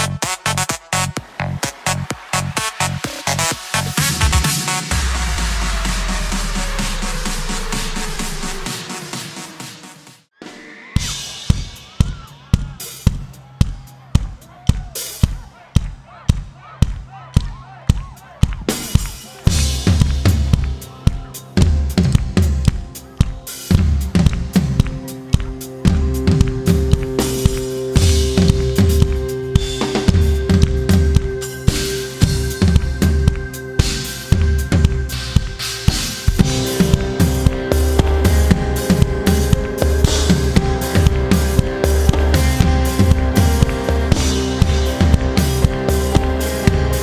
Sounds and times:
Music: 0.0s - 47.0s.

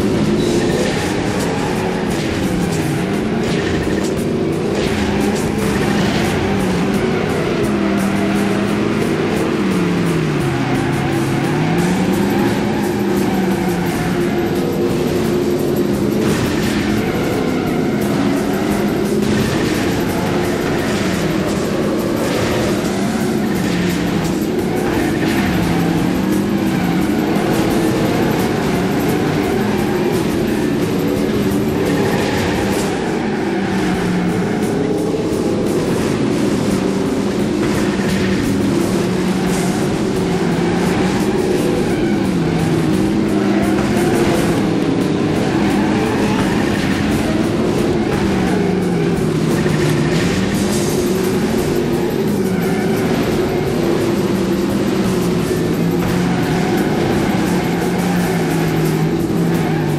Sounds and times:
Car: 0.0s - 59.9s
Music: 0.0s - 59.9s.

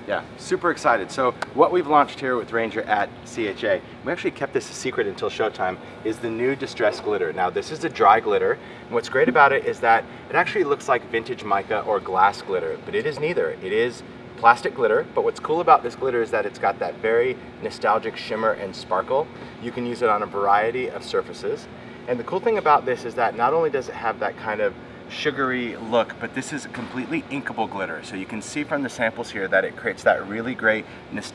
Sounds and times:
Speech: 0.0s - 31.3s.

